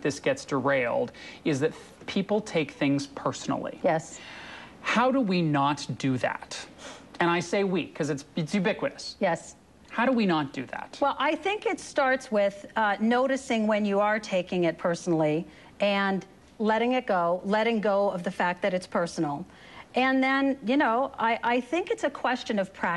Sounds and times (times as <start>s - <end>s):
Conversation: 0.0s - 22.9s.